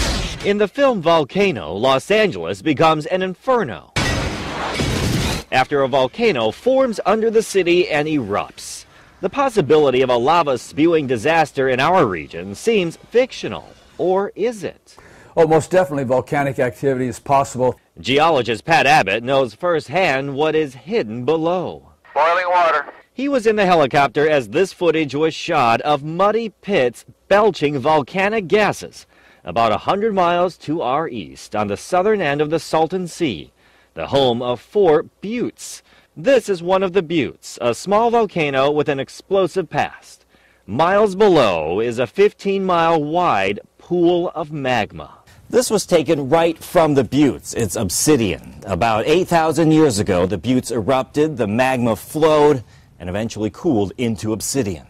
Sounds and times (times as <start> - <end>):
Explosion: 0.0 - 0.5, 4.0 - 5.5
Speech: 0.4 - 4.0, 5.5 - 54.8.